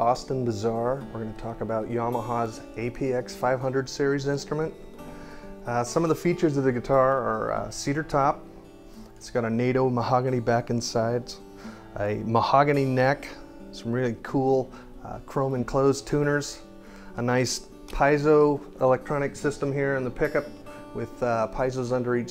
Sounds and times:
Speech: 0.0s - 4.8s, 5.7s - 8.4s, 9.2s - 22.3s
Guitar: 0.0s - 22.3s.

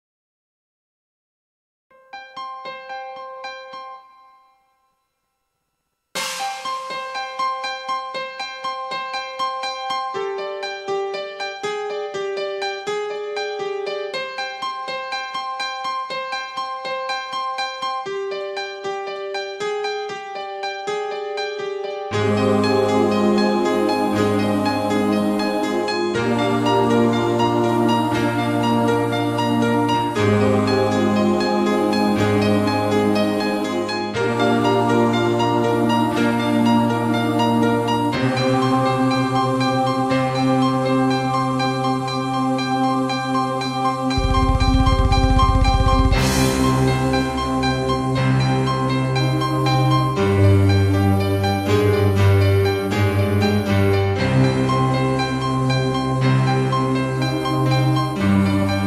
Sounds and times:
Piano: 1.9s - 4.9s, 6.2s - 58.8s.

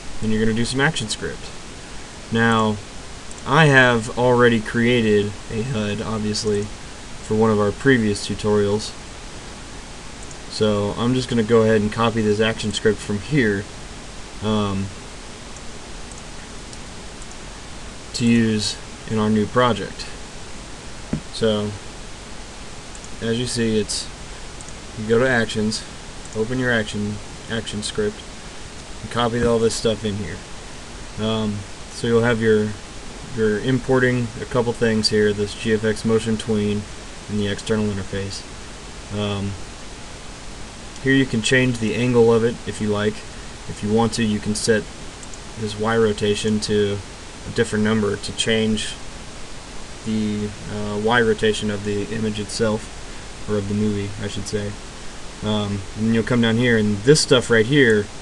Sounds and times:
Pink noise: 0.0s - 58.2s
Speech: 0.2s - 1.6s, 2.3s - 9.0s, 10.5s - 13.7s, 14.4s - 15.0s, 18.1s - 20.2s, 21.3s - 21.8s, 23.2s - 24.2s, 25.0s - 28.2s, 29.0s - 30.4s, 31.2s - 38.5s, 39.1s - 39.6s, 41.0s - 44.9s, 45.6s - 49.0s, 50.0s - 54.8s, 55.4s - 58.1s.

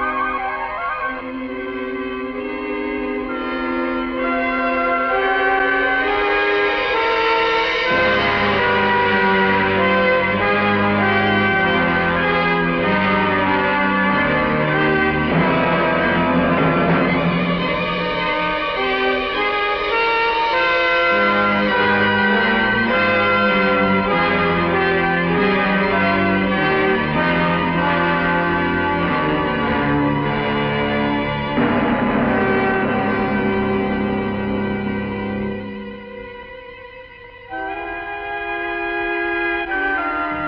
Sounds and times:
Scary music: 0.0s - 38.1s.

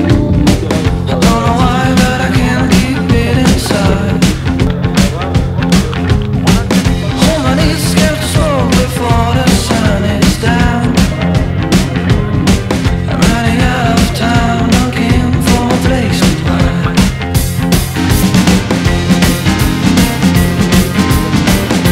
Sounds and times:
Music: 0.0s - 21.9s
Speech: 4.8s - 9.0s.

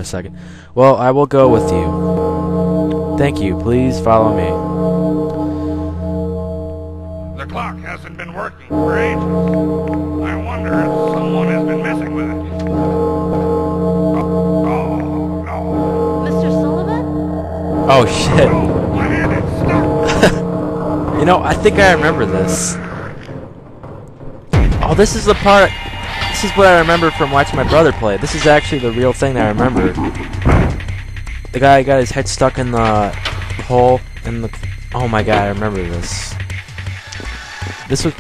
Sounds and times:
Speech: 0.0s - 1.9s, 7.4s - 9.2s, 10.3s - 12.4s, 17.9s - 19.9s, 24.8s - 25.7s, 26.4s - 30.0s, 31.6s - 36.4s, 37.9s - 38.2s.

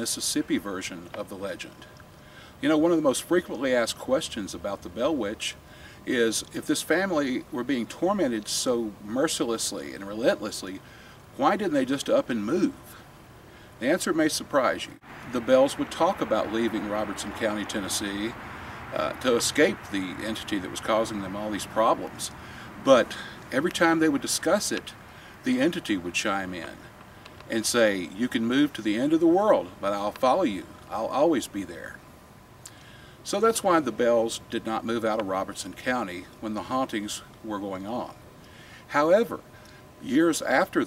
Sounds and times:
Speech: 0.0s - 1.9s, 2.6s - 10.8s, 11.4s - 13.0s, 13.8s - 26.9s, 27.5s - 32.0s, 33.2s - 38.2s, 38.9s - 40.8s.

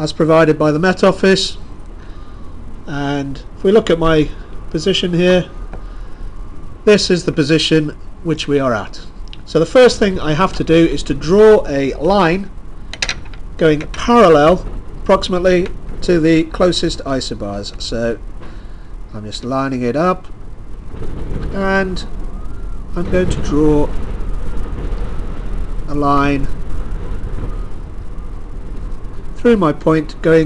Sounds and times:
Speech: 0.0s - 1.6s, 2.9s - 5.5s, 6.9s - 12.5s, 13.6s - 18.2s, 19.1s - 20.3s, 21.5s - 22.1s, 23.0s - 23.9s, 25.9s - 26.5s, 29.4s - 30.4s.

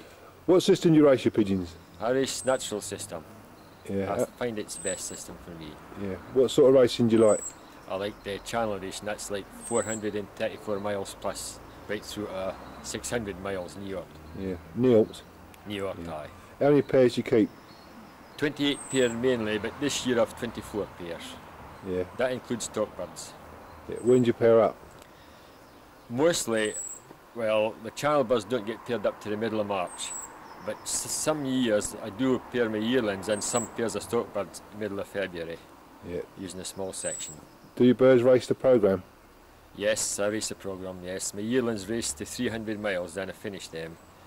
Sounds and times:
Bird: 1.4s - 38.3s
Speech: 3.9s - 17.5s, 18.4s - 24.8s, 26.1s - 26.8s, 27.4s - 39.1s, 39.8s - 44.0s.

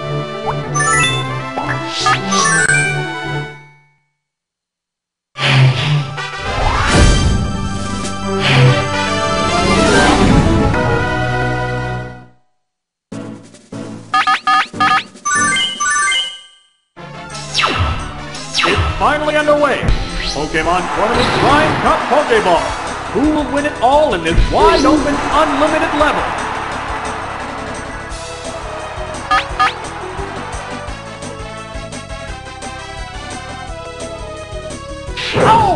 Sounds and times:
Music: 0.0s - 4.2s, 5.4s - 12.5s, 13.1s - 16.4s, 17.0s - 35.7s
Speech: 18.7s - 26.2s, 35.4s - 35.7s.

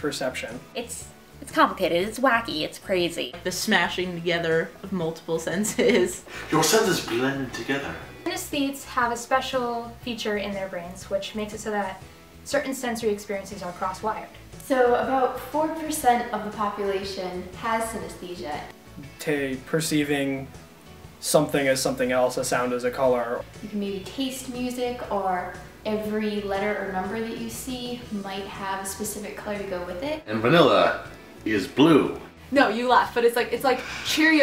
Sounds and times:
Music: 0.0s - 34.4s
Speech: 6.5s - 8.0s.

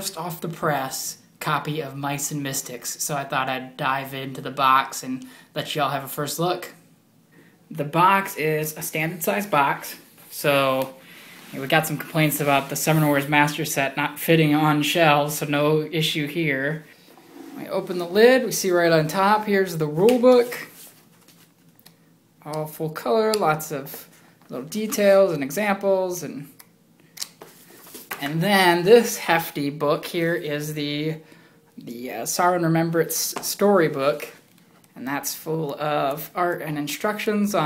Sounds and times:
Speech: 0.0s - 6.8s, 7.7s - 16.9s, 17.6s - 20.8s, 22.4s - 26.6s, 28.2s - 31.2s, 31.8s - 34.4s, 35.0s - 37.6s.

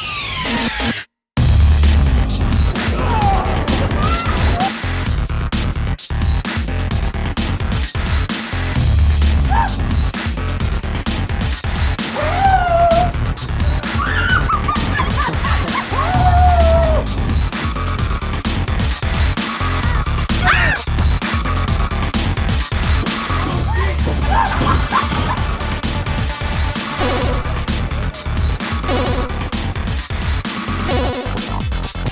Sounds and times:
Music: 0.0s - 32.1s.

